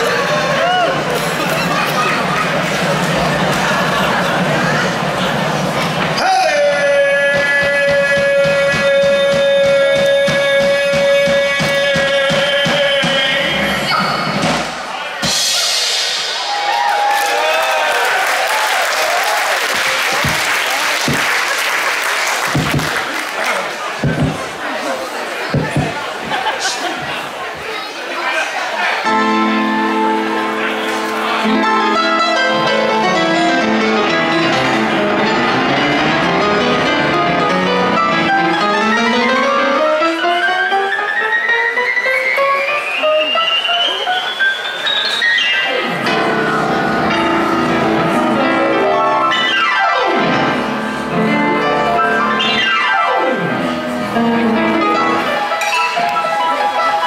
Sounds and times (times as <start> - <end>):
Speech: 0.0 - 14.1, 23.0 - 29.2
Music: 0.0 - 17.2, 29.0 - 57.0.